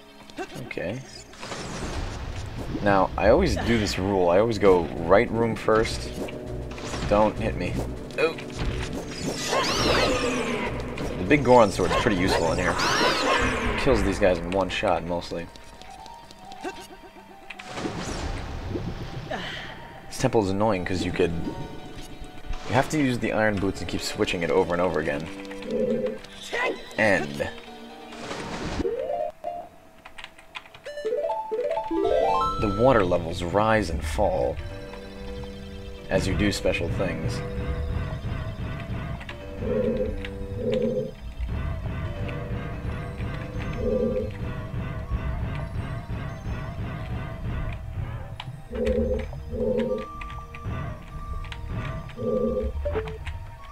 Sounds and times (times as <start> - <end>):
Speech: 0.4 - 1.2, 2.8 - 6.1, 11.2 - 12.8, 13.8 - 15.5, 22.7 - 25.3, 26.5 - 27.6, 32.6 - 34.6, 36.1 - 37.4.